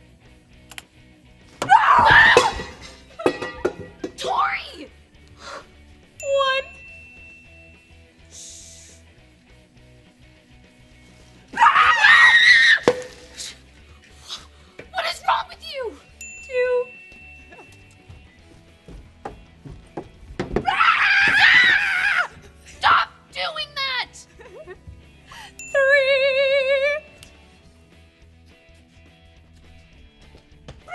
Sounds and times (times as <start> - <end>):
Music: 0.0 - 30.9.